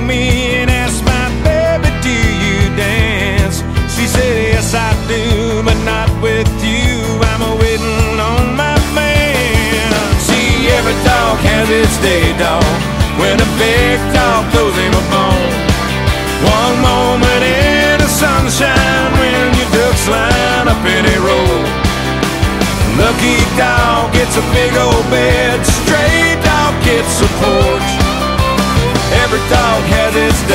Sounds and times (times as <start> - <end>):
Music: 0.0 - 30.5.